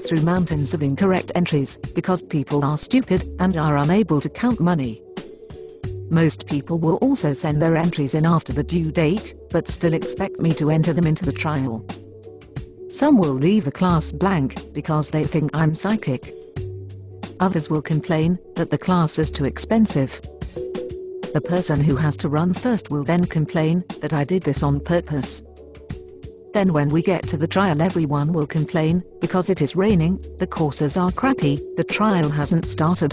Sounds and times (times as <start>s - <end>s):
Speech: 0.0s - 5.0s, 6.1s - 11.9s, 12.9s - 16.3s, 17.4s - 20.2s, 21.4s - 25.4s, 26.6s - 33.1s
Music: 0.0s - 33.1s.